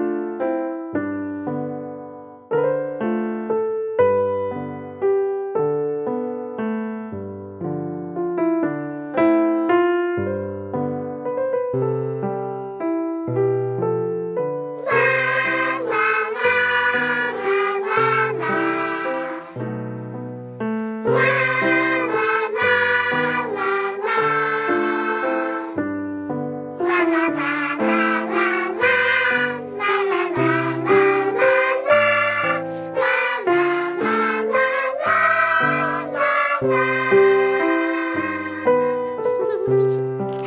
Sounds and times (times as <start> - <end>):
Electric piano: 0.0 - 40.4.